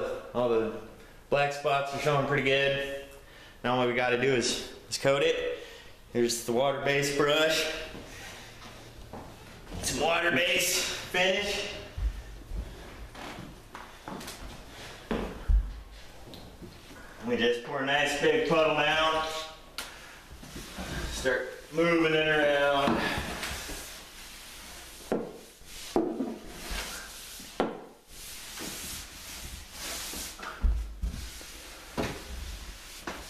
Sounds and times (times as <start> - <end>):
Speech: 0.0 - 8.0, 9.8 - 12.0, 17.2 - 19.6, 21.0 - 23.3.